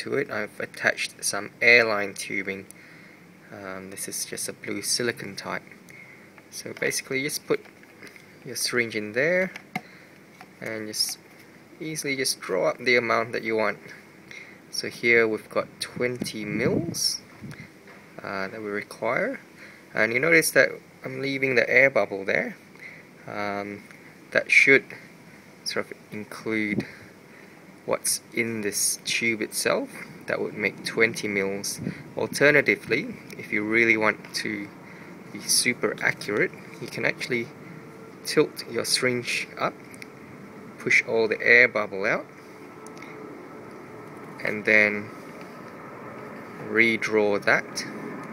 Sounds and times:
Speech: 0.0s - 2.7s, 3.5s - 5.7s, 6.5s - 7.7s, 8.4s - 9.6s, 10.6s - 11.2s, 11.8s - 14.0s, 14.7s - 17.3s, 18.2s - 22.6s, 23.2s - 25.0s, 25.6s - 27.0s, 27.9s - 34.7s, 35.4s - 37.5s, 38.3s - 39.8s, 40.8s - 42.3s, 44.4s - 45.1s, 46.6s - 48.0s.

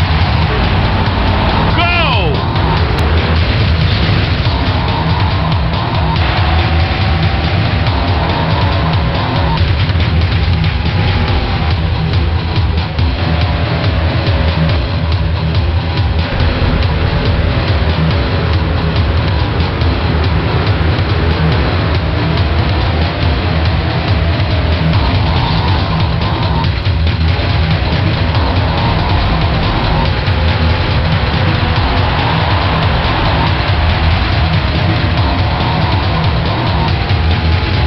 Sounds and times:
Music: 0.0s - 37.8s
Vehicle: 0.0s - 37.8s.

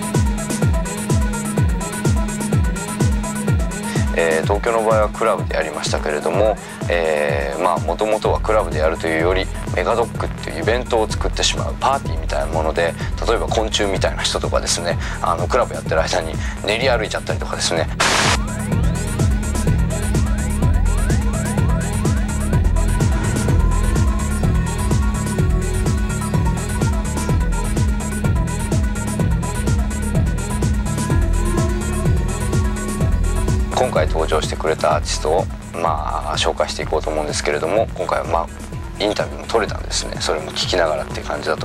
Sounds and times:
Music: 0.0s - 41.6s
Speech: 4.1s - 18.0s, 33.7s - 41.6s.

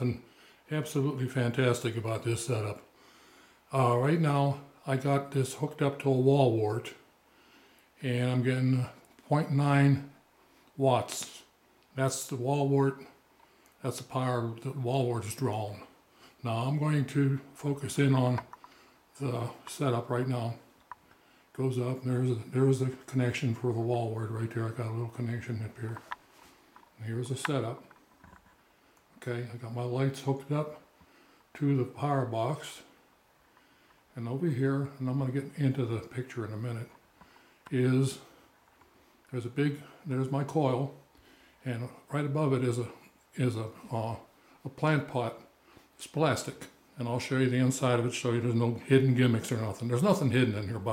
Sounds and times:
Speech: 0.0s - 2.9s, 3.7s - 7.1s, 8.0s - 10.2s, 10.8s - 13.2s, 13.8s - 18.5s, 19.2s - 20.7s, 21.5s - 26.1s, 27.0s - 27.9s, 29.2s - 30.9s, 31.6s - 33.0s, 34.1s - 37.0s, 37.7s - 38.4s, 39.3s - 41.0s, 41.6s - 50.9s.

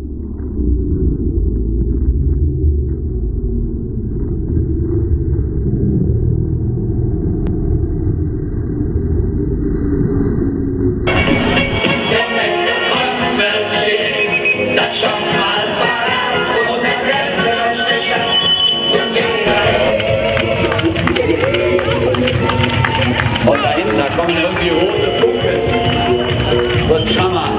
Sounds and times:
Music: 11.1s - 27.5s.

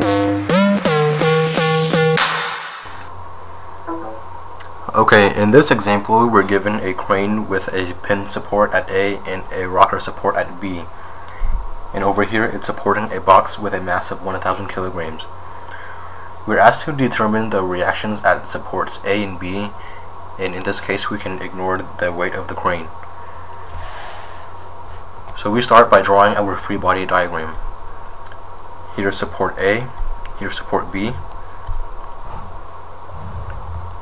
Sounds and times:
Speech: 4.9s - 10.9s, 11.9s - 15.3s, 16.5s - 19.8s, 20.4s - 23.0s, 25.3s - 27.6s, 28.9s - 31.3s.

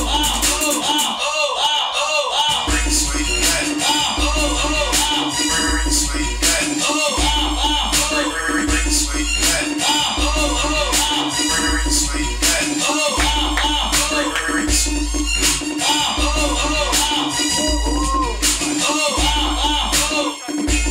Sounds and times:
Scratching (performance technique): 0.0s - 1.3s, 2.5s - 20.9s
Inside, large room or hall: 0.0s - 20.9s.

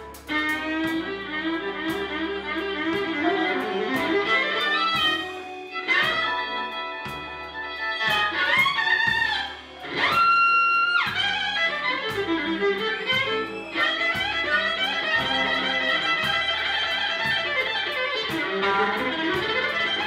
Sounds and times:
Blues: 0.0s - 20.0s
Jazz: 0.0s - 20.0s
Violin, fiddle: 0.0s - 20.0s.

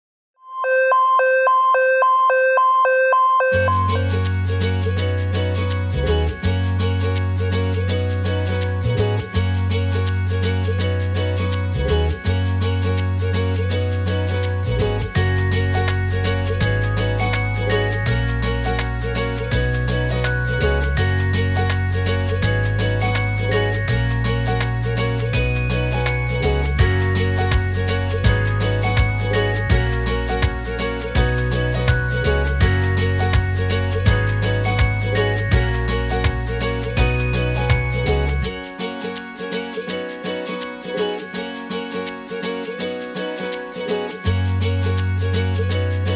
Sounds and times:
Music: 3.5s - 46.1s.

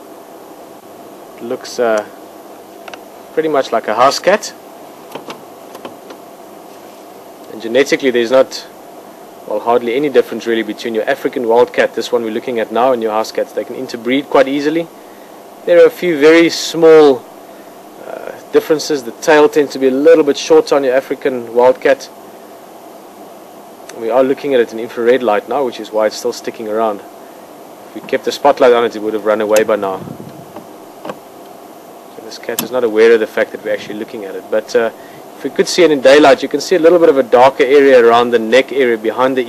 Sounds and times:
Speech: 1.4s - 2.2s, 3.4s - 4.6s, 7.5s - 8.8s, 9.5s - 15.0s, 15.7s - 17.2s, 18.0s - 22.2s, 23.9s - 27.1s, 27.9s - 30.1s, 32.2s - 39.4s.

